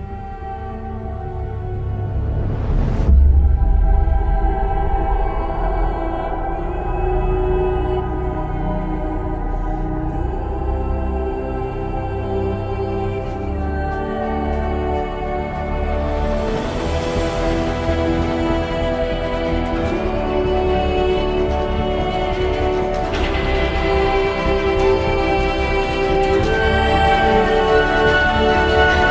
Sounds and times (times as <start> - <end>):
Music: 0.0 - 29.1.